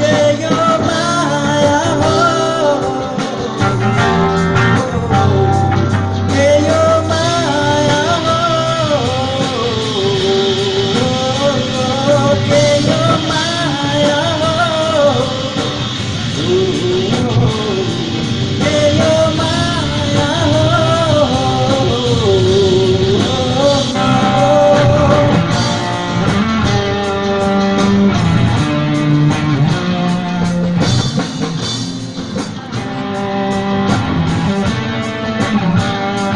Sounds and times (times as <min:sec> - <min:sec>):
Singing: 0:00.0 - 0:26.4
Vocal music: 0:00.0 - 0:36.3.